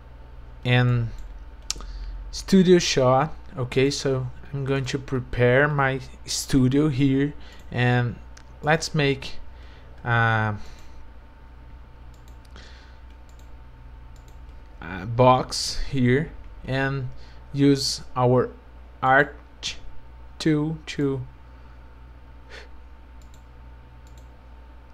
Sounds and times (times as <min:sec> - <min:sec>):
Speech: 0:00.6 - 0:01.2, 0:02.3 - 0:09.4, 0:10.0 - 0:10.7, 0:14.8 - 0:21.3.